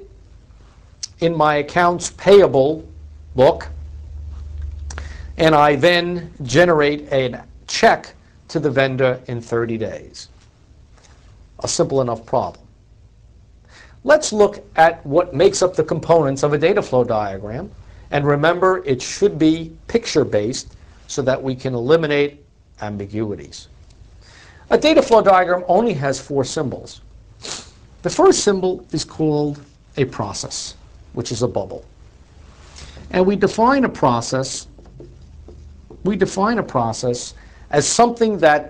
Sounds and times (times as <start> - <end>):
Speech: 1.0 - 3.8, 5.4 - 10.3, 11.6 - 12.7, 14.0 - 23.7, 24.7 - 27.0, 28.0 - 31.9, 33.0 - 34.8, 36.0 - 38.6.